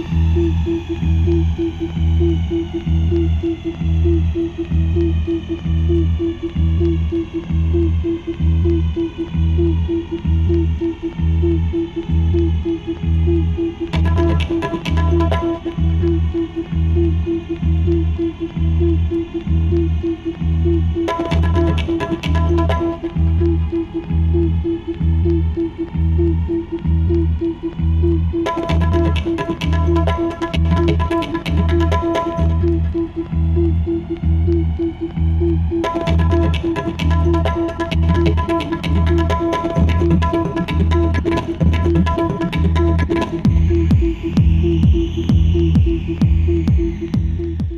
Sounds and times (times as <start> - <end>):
Music: 0.0 - 47.7.